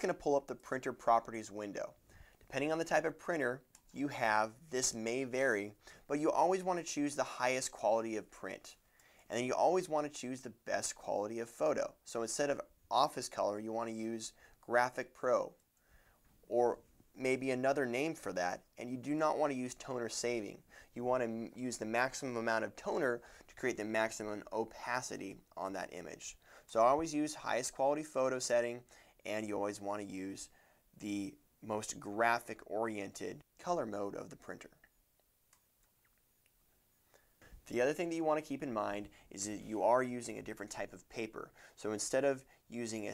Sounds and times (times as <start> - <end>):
Speech: 0.0 - 15.6, 16.5 - 34.9, 37.6 - 43.1.